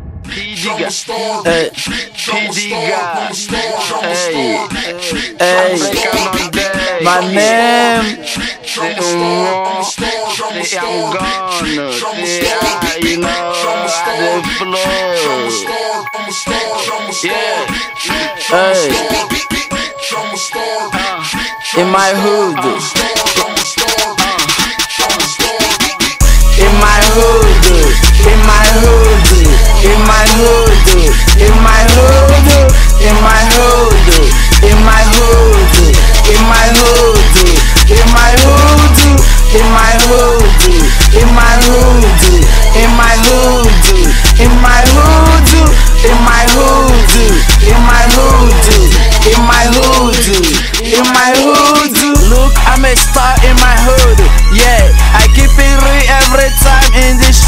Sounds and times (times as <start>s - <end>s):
Music: 0.0s - 57.4s.